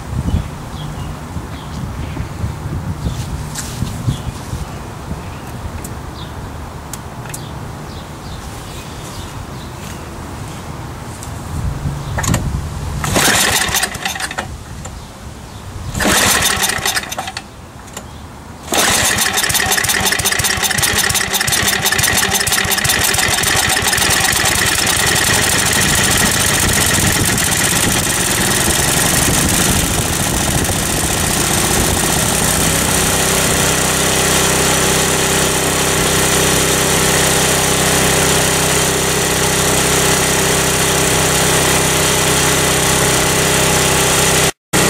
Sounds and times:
Engine: 0.0 - 6.3, 6.9 - 8.4, 11.2 - 44.9.

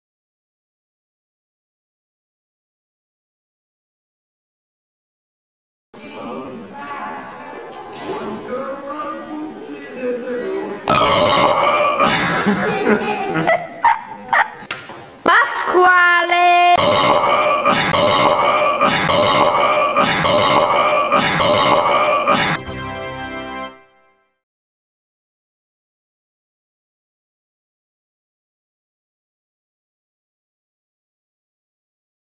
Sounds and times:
Music: 22.3 - 24.4.

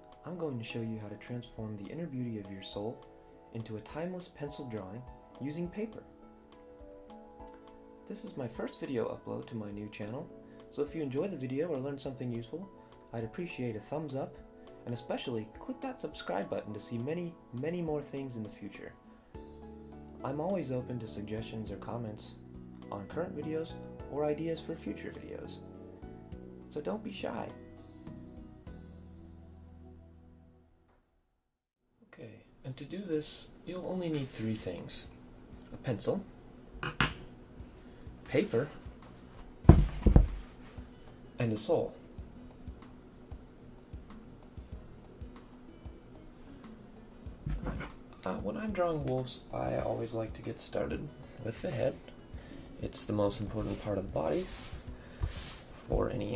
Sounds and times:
Inside, small room: 0.0 - 56.3
Speech: 0.2 - 6.1, 8.1 - 19.0, 20.2 - 25.6, 26.7 - 27.6, 32.1 - 36.3, 38.3 - 38.8, 41.4 - 42.0, 47.5 - 52.0, 52.8 - 54.6, 55.9 - 56.3.

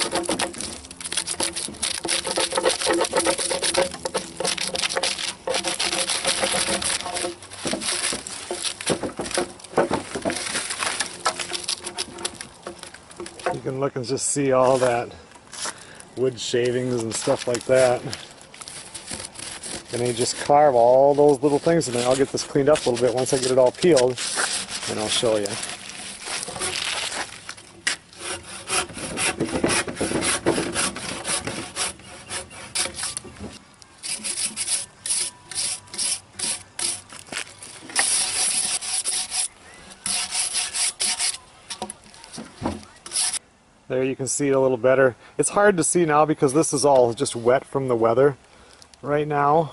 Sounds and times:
Sawing: 0.0 - 13.6, 16.9 - 37.2, 37.8 - 41.9, 42.6 - 43.4
Wood: 0.0 - 13.8, 17.0 - 43.4.

